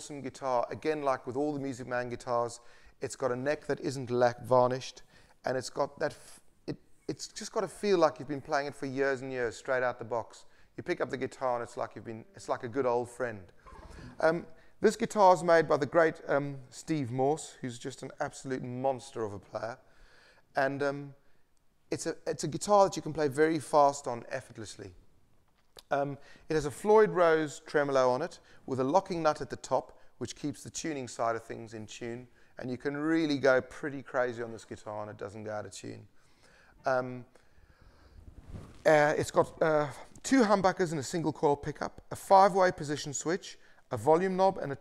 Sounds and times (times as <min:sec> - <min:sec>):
Speech: 0:00.0 - 0:19.9, 0:20.5 - 0:21.2, 0:21.9 - 0:25.0, 0:25.8 - 0:36.1, 0:36.8 - 0:37.4, 0:38.8 - 0:44.8.